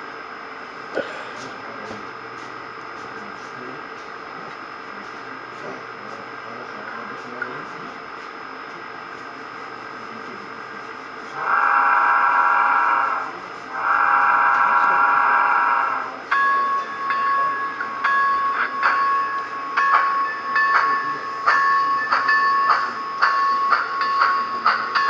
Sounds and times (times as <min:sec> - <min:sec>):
Speech: 0:01.0 - 0:02.2, 0:02.9 - 0:11.6, 0:13.0 - 0:25.0.